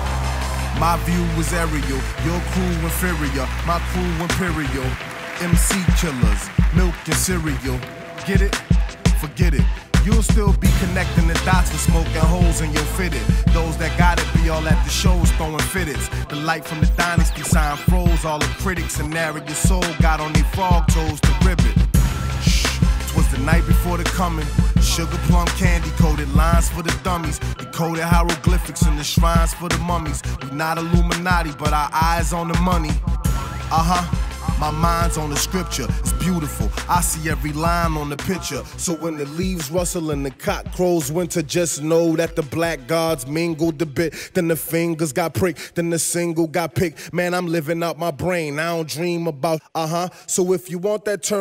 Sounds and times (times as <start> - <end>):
Electronica: 0.0 - 40.3.